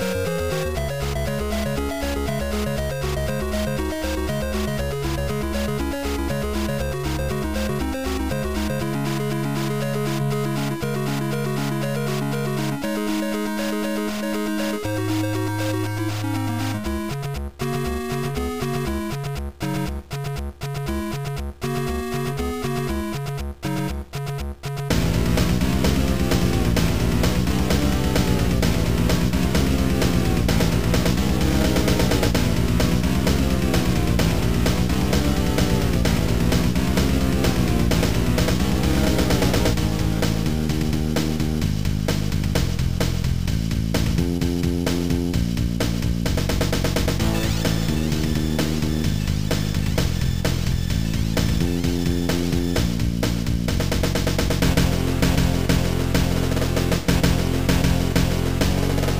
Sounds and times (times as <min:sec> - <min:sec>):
Music: 0:00.0 - 0:59.1.